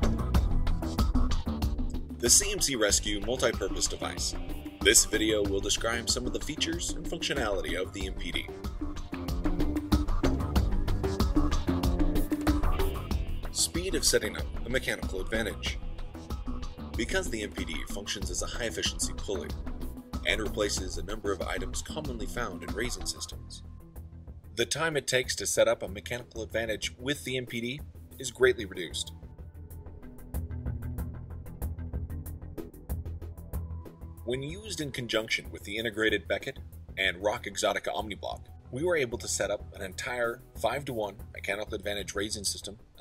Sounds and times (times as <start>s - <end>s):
Music: 0.0s - 43.0s
Speech: 2.2s - 8.5s, 13.6s - 15.8s, 17.0s - 19.5s, 20.3s - 23.6s, 24.6s - 29.2s, 34.3s - 43.0s.